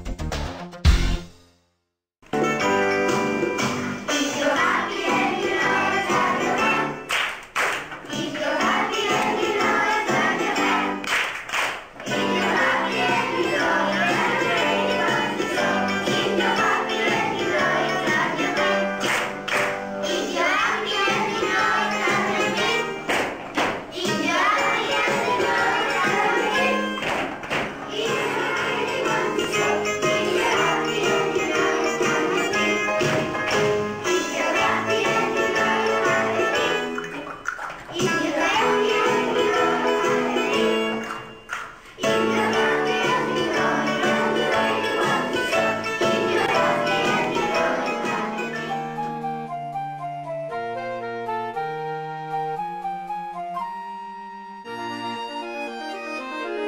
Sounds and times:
Happy music: 0.0 - 1.6, 2.2 - 7.2, 8.1 - 11.1, 12.0 - 37.3, 37.9 - 56.6.

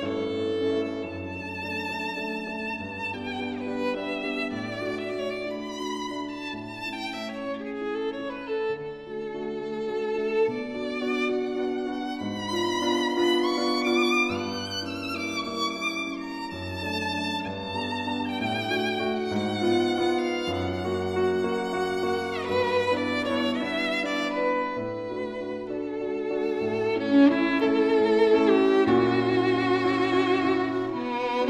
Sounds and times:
Violin, fiddle: 0.0 - 31.4.

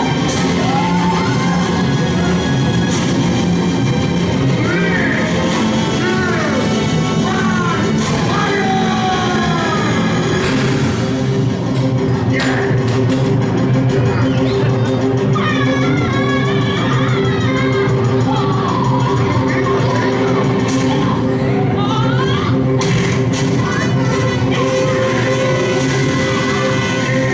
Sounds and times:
Music: 0.0 - 27.3
Speech: 6.0 - 10.2.

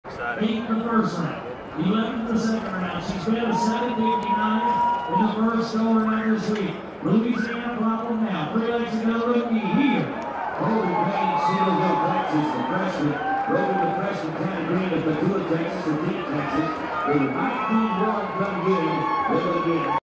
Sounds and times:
Speech: 0.1 - 20.0.

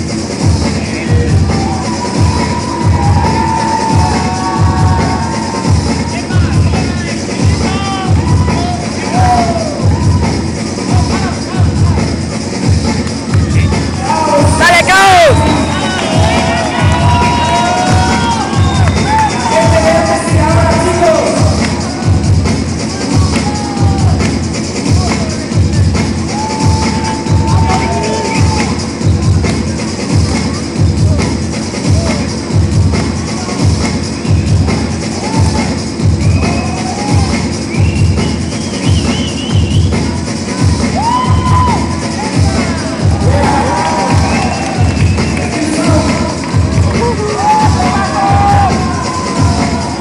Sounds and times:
Crowd: 0.0 - 50.0
Music: 0.0 - 50.0.

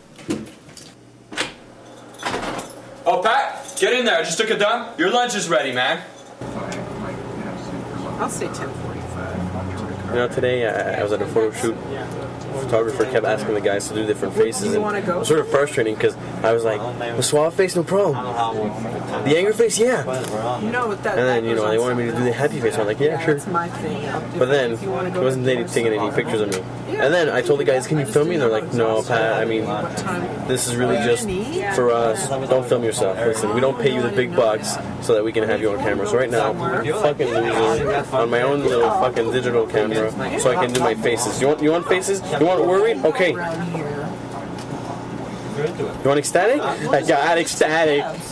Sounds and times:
Male speech, man speaking: 3.1 - 8.2, 8.8 - 23.6, 24.3 - 43.5, 45.5 - 48.3.

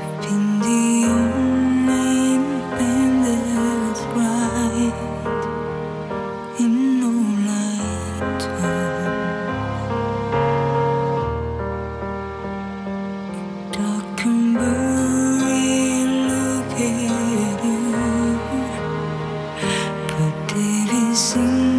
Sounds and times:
Music: 0.0 - 21.7.

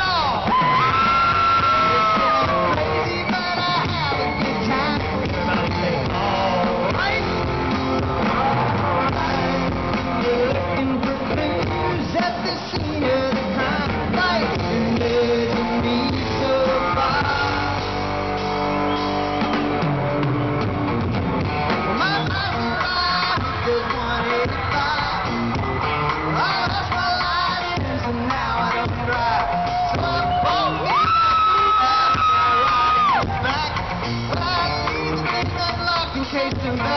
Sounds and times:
Music: 0.0 - 36.9
Male singing: 1.8 - 7.5, 8.2 - 18.0, 21.9 - 25.4, 26.3 - 36.9.

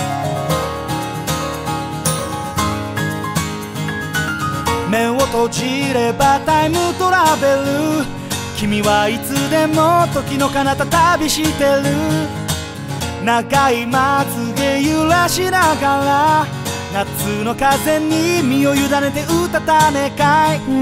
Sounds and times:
Music: 0.0 - 20.8.

